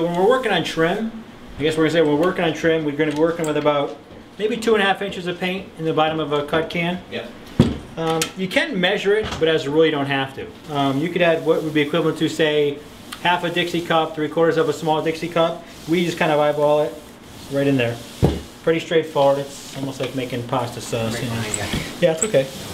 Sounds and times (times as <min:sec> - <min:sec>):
Speech: 0:00.0 - 0:07.3, 0:08.0 - 0:18.1, 0:18.7 - 0:22.6.